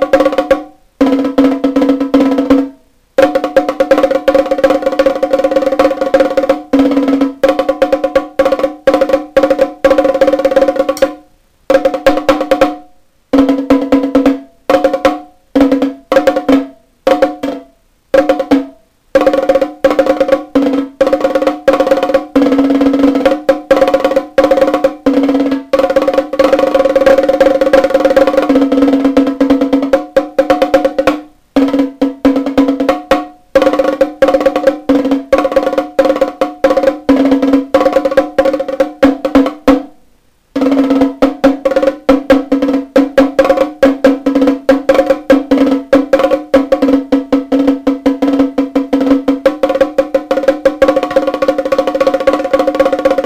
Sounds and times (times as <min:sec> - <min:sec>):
Music: 0:00.0 - 0:53.2.